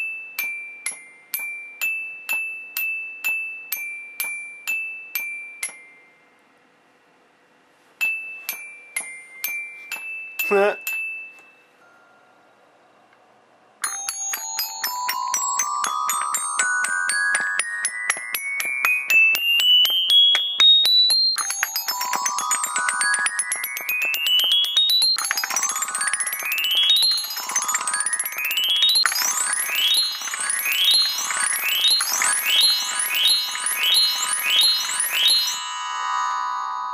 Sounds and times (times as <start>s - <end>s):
Marimba, xylophone: 8.0s - 12.2s, 13.8s - 36.9s.